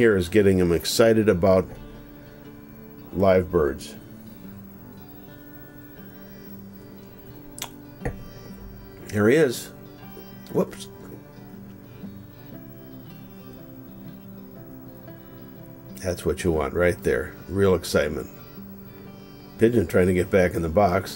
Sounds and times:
Speech: 0:00.0 - 0:01.8, 0:03.2 - 0:04.0, 0:09.1 - 0:09.7, 0:10.5 - 0:10.9, 0:16.0 - 0:18.3, 0:19.6 - 0:21.1
Music: 0:00.0 - 0:21.1.

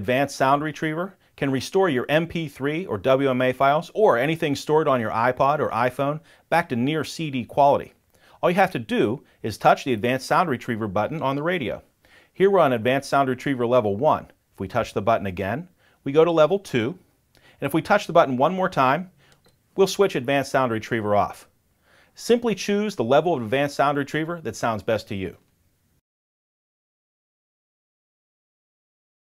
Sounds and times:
Speech: 0:00.0 - 0:17.0, 0:17.6 - 0:19.1, 0:19.8 - 0:21.5, 0:22.2 - 0:25.5.

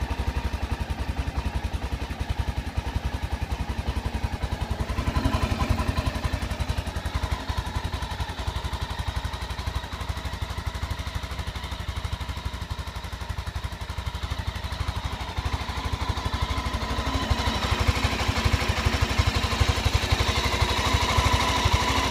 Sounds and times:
Heavy engine (low frequency): 0:00.0 - 0:22.1
Vehicle: 0:00.0 - 0:22.1.

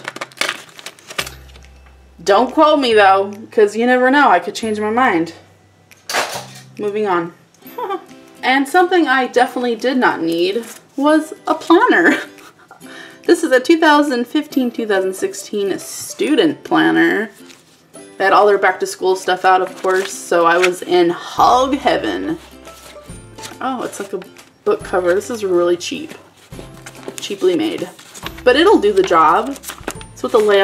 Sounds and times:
Music: 0:00.0 - 0:30.6
Speech: 0:02.2 - 0:05.4, 0:06.8 - 0:12.2, 0:13.3 - 0:17.4, 0:18.2 - 0:22.4, 0:23.6 - 0:26.2, 0:27.2 - 0:29.6, 0:30.2 - 0:30.6.

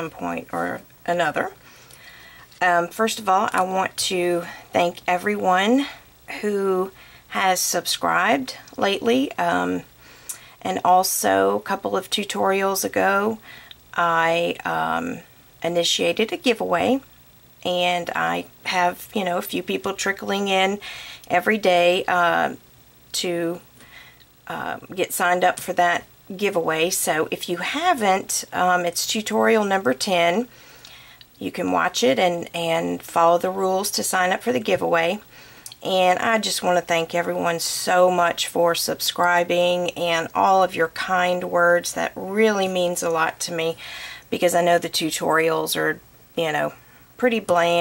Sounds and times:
Speech: 0:00.0 - 0:01.6, 0:02.6 - 0:09.9, 0:10.6 - 0:23.7, 0:24.5 - 0:30.5, 0:31.4 - 0:47.8.

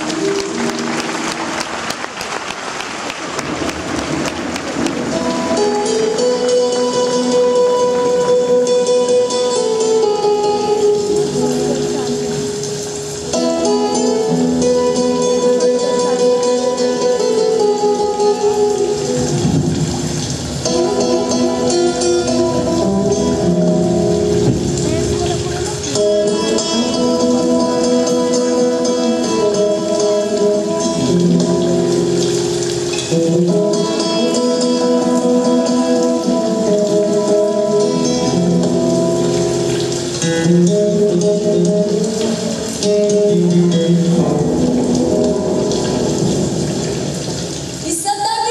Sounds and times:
Music: 0:00.0 - 0:48.5.

